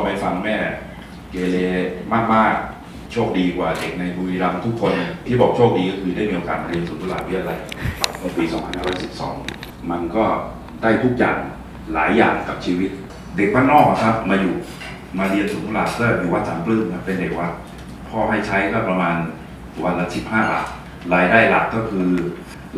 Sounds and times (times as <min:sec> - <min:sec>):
Speech: 0:00.0 - 0:22.7.